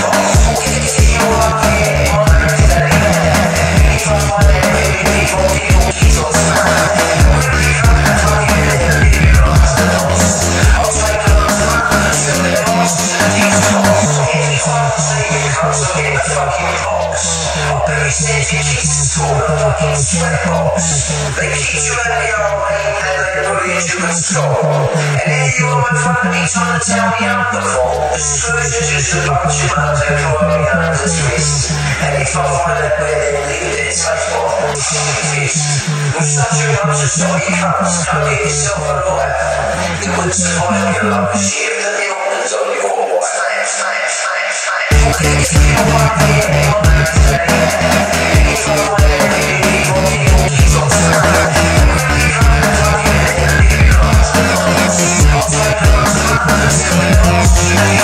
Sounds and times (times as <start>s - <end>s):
Dubstep: 0.0s - 58.0s.